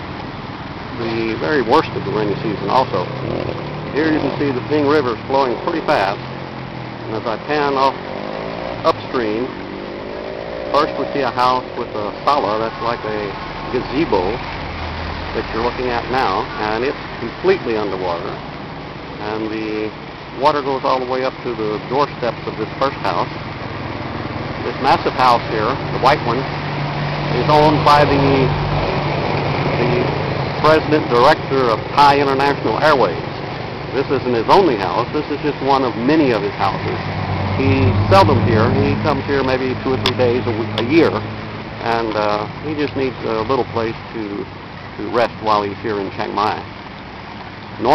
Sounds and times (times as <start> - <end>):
Speech: 0.9 - 3.1, 4.0 - 6.2, 7.1 - 8.0, 8.8 - 9.5, 10.7 - 14.4, 15.4 - 18.4, 19.2 - 23.3, 24.6 - 26.5, 27.3 - 28.6, 29.8 - 33.2, 34.0 - 37.0, 37.6 - 41.2, 41.8 - 46.6.